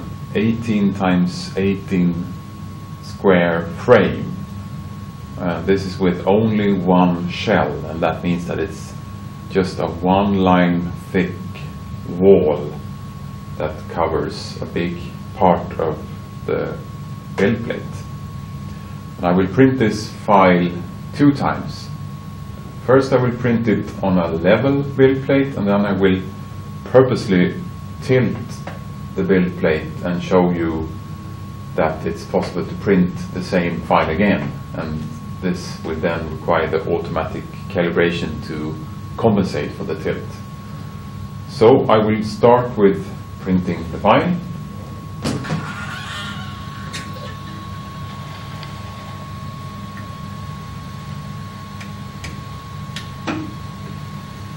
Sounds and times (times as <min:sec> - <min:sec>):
Speech: 0:00.0 - 0:02.4, 0:03.0 - 0:04.4, 0:05.4 - 0:12.8, 0:13.6 - 0:18.1, 0:19.2 - 0:22.0, 0:22.8 - 0:31.0, 0:31.8 - 0:40.5, 0:41.5 - 0:44.6.